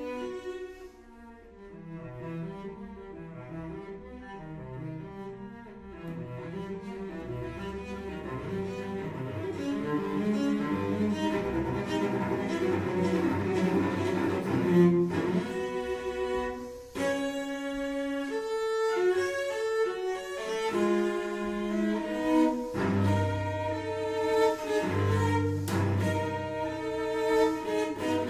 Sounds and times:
Cello: 0.0 - 28.3
Classical music: 0.0 - 28.3.

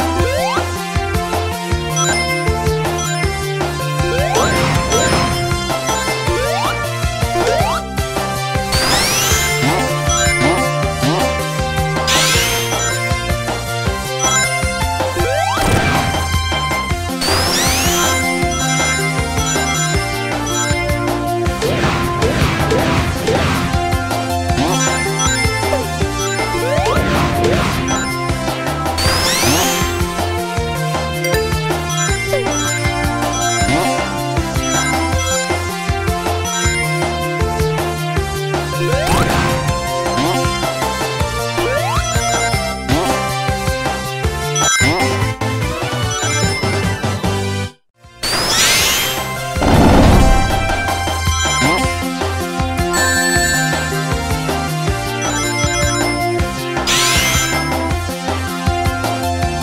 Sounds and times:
Music: 0.0 - 59.6.

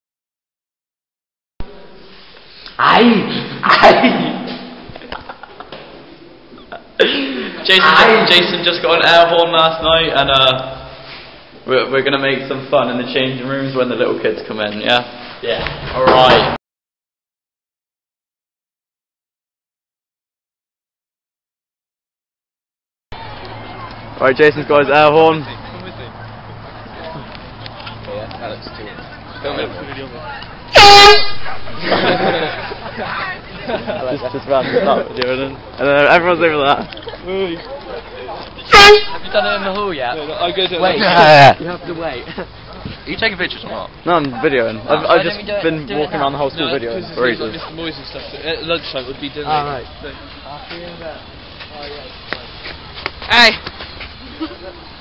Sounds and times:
Outside, urban or manmade: 1.6 - 16.6, 23.1 - 55.0
Air horn, truck horn: 30.7 - 31.7, 38.7 - 39.4.

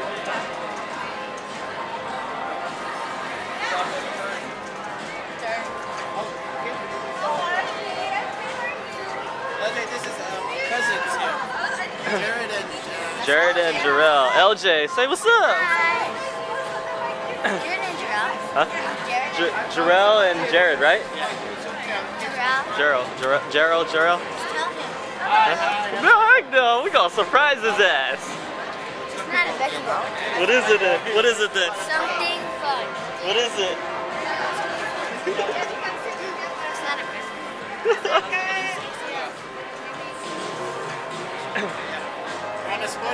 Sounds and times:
Inside, public space: 0.0 - 43.1.

